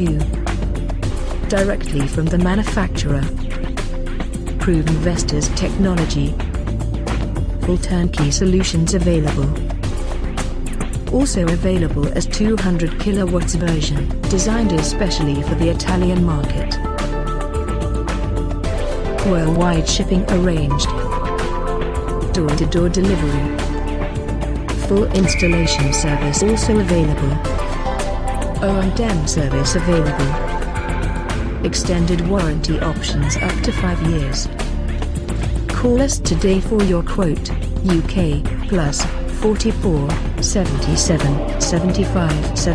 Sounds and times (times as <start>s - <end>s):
Speech: 0.0s - 0.4s, 1.5s - 3.3s, 4.6s - 6.4s, 7.6s - 9.6s, 11.1s - 16.8s, 19.2s - 21.0s, 22.3s - 23.6s, 24.8s - 27.4s, 28.6s - 30.5s, 31.6s - 34.6s, 35.7s - 42.7s
Music: 0.0s - 42.7s.